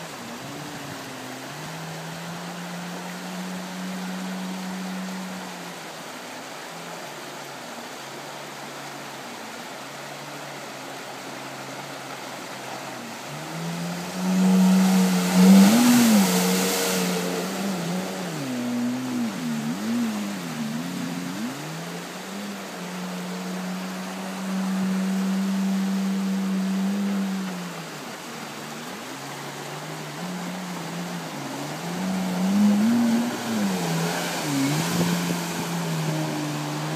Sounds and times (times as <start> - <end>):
Motorboat, speedboat: 0.0 - 36.9
Sailboat, sailing ship: 0.0 - 36.9
Ship: 0.0 - 36.9.